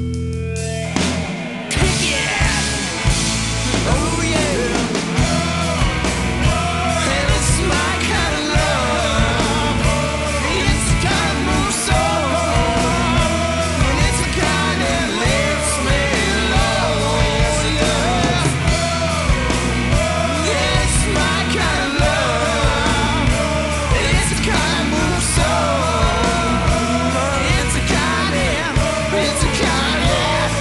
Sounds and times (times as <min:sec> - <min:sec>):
Grunge: 0:00.0 - 0:30.6.